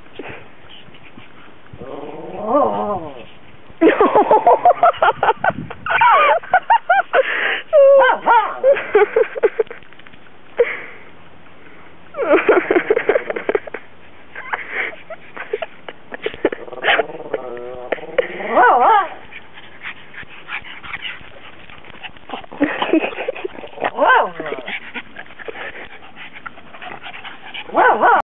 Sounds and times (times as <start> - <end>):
Dog: 18.6 - 28.2.